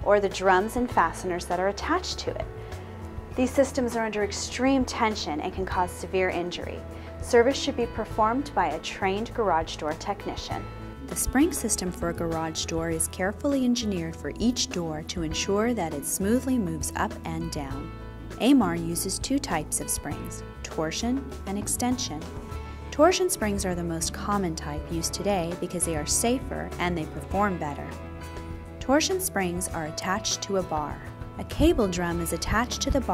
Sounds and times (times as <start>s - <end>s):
Speech: 0.0s - 2.5s, 3.4s - 22.3s, 23.0s - 27.9s, 28.8s - 33.1s
Music: 0.0s - 33.1s.